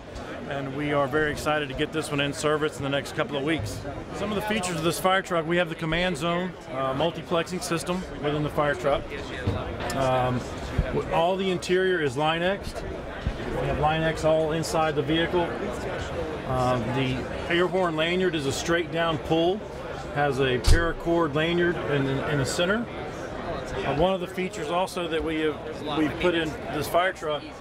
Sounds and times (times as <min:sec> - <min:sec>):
Speech: 0:00.2 - 0:27.6.